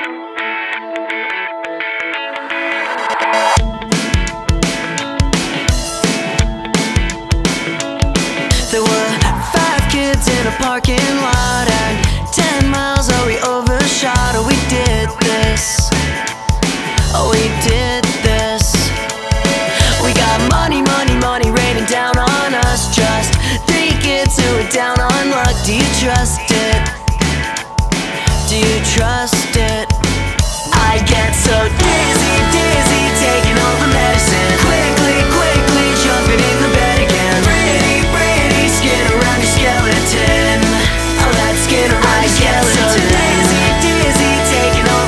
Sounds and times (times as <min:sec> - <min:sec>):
Music: 0:00.0 - 0:45.0.